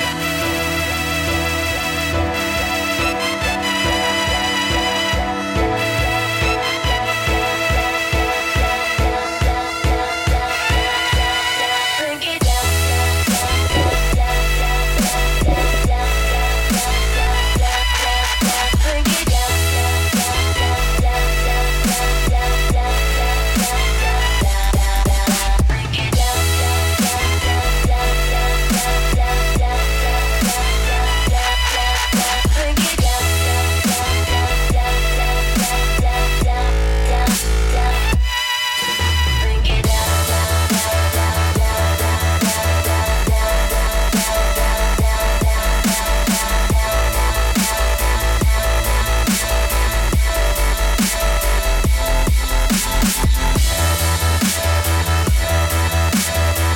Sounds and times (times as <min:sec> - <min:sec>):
Soundtrack music: 0:00.0 - 0:26.4
Exciting music: 0:00.0 - 0:27.4, 0:37.2 - 0:56.7
Background music: 0:00.0 - 0:56.7.